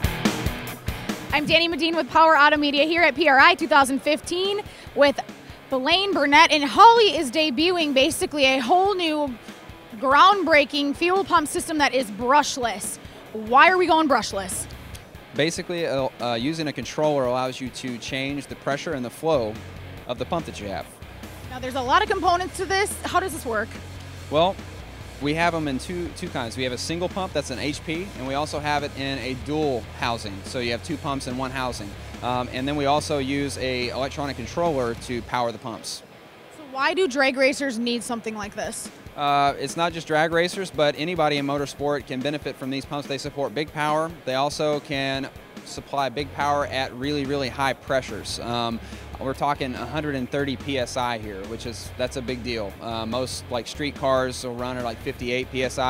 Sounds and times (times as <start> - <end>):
Music: 0.0 - 55.8
Speech: 1.4 - 9.3, 10.0 - 14.6, 15.4 - 20.9, 21.5 - 24.6, 25.2 - 36.0, 36.6 - 55.8.